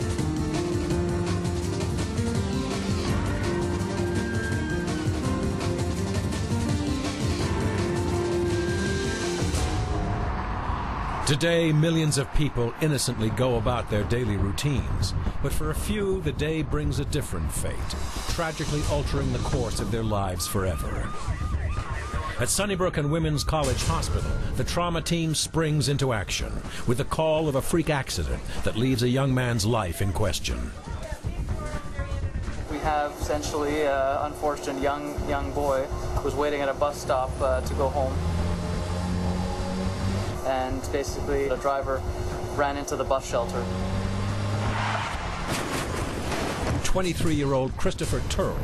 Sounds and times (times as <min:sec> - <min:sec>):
Music: 0:00.0 - 0:11.4, 0:17.9 - 0:42.6
Speech: 0:11.3 - 0:21.1, 0:22.4 - 0:38.2, 0:40.4 - 0:42.0, 0:42.6 - 0:43.7, 0:46.9 - 0:48.6.